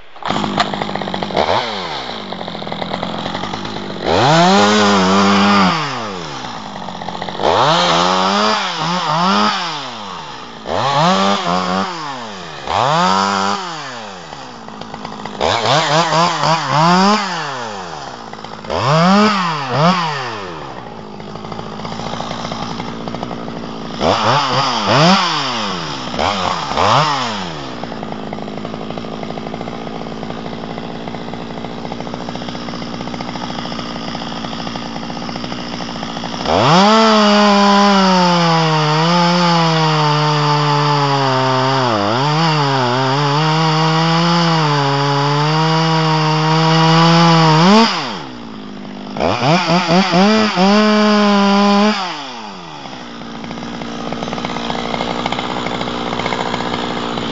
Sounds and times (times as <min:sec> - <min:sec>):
Chainsaw: 0:00.0 - 0:57.3.